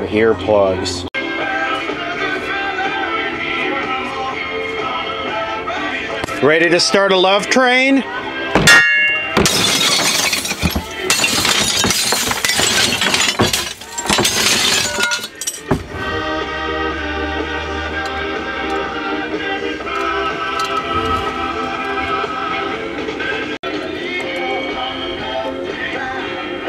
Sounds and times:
Music: 0:00.0 - 0:26.6
Glass: 0:08.6 - 0:15.8.

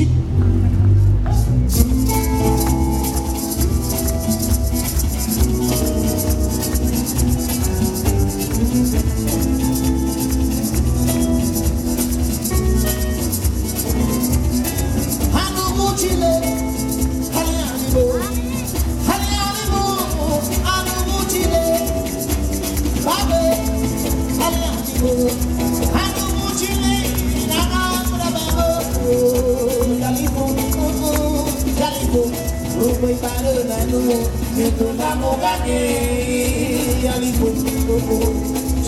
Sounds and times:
Music: 0:00.0 - 0:38.8.

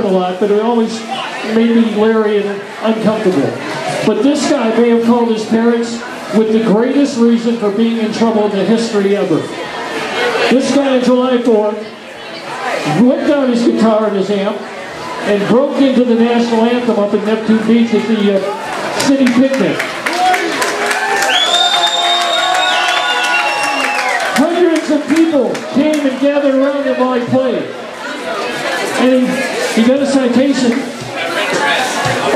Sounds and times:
Speech: 0:00.0 - 0:20.4, 0:24.4 - 0:32.3.

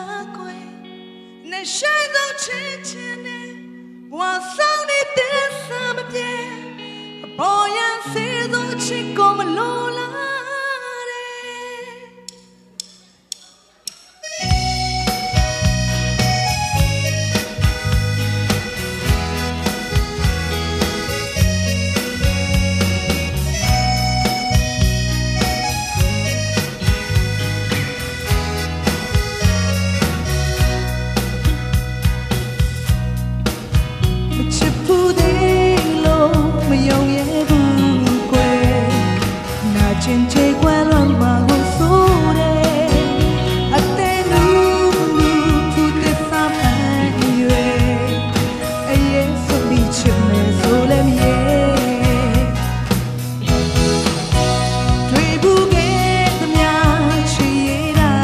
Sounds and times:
Music: 0:00.0 - 0:58.2.

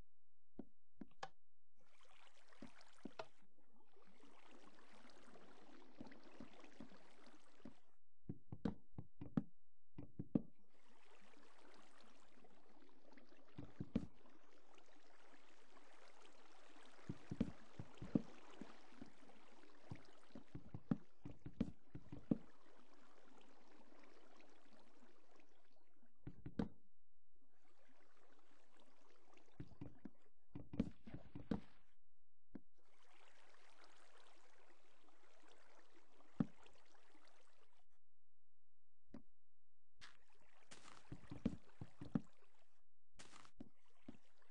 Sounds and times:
Stream: 0:01.8 - 0:07.9, 0:10.7 - 0:25.8, 0:32.8 - 0:37.8, 0:40.0 - 0:42.6, 0:43.2 - 0:44.5.

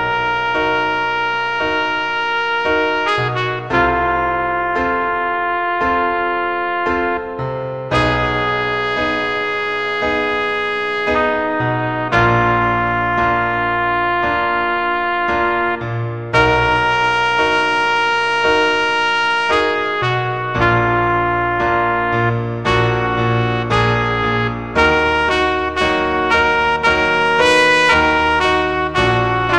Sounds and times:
Trumpet: 0:00.0 - 0:29.5.

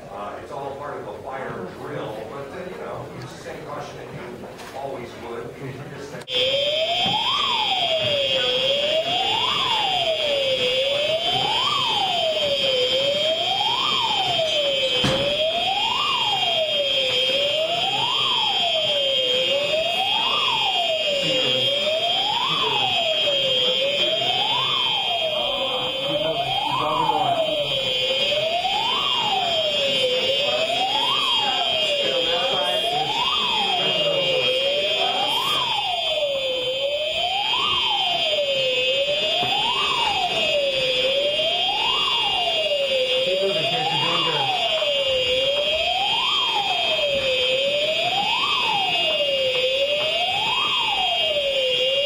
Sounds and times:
Emergency vehicle: 0:06.2 - 0:52.0
Siren: 0:06.2 - 0:52.0.

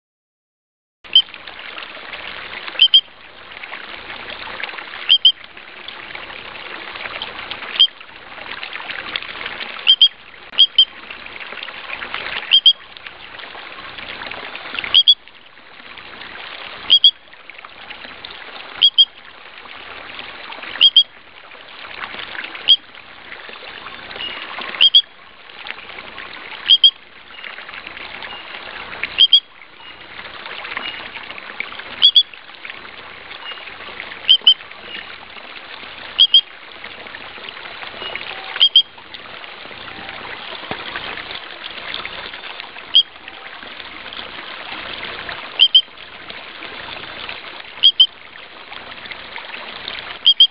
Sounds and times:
Frog: 0:01.1 - 0:01.3, 0:02.8 - 0:03.1, 0:05.1 - 0:05.4, 0:07.7 - 0:08.0, 0:09.8 - 0:11.0, 0:12.4 - 0:12.9, 0:14.8 - 0:15.3, 0:16.9 - 0:17.2, 0:18.8 - 0:19.2, 0:20.8 - 0:21.1, 0:22.6 - 0:22.9, 0:24.2 - 0:25.2, 0:26.7 - 0:27.6, 0:29.2 - 0:30.0, 0:30.7 - 0:31.2, 0:32.0 - 0:32.4, 0:33.4 - 0:35.2, 0:36.2 - 0:36.5, 0:38.0 - 0:39.0, 0:42.0 - 0:43.6, 0:45.5 - 0:46.0, 0:47.8 - 0:48.2, 0:50.2 - 0:50.5.

